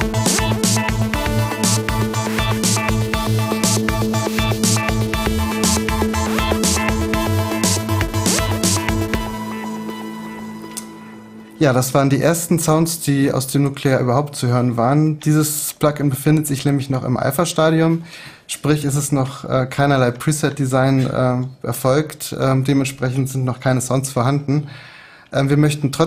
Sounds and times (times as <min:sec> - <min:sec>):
Sampler: 0:00.0 - 0:13.1
Speech: 0:11.6 - 0:24.7, 0:25.3 - 0:26.0.